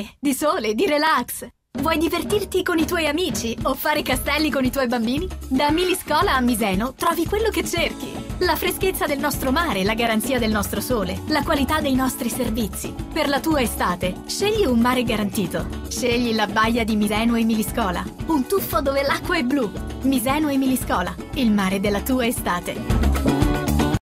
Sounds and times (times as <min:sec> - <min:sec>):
Speech: 0:00.0 - 0:22.8
Music: 0:00.8 - 0:24.0.